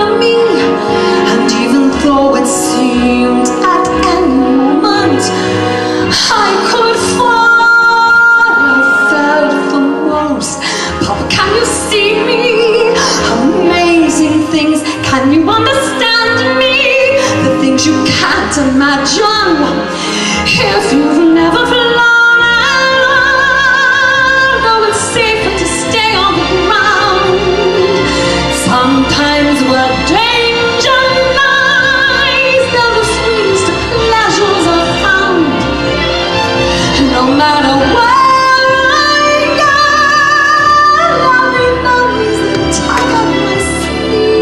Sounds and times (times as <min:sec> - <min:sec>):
Music: 0:00.0 - 0:44.4.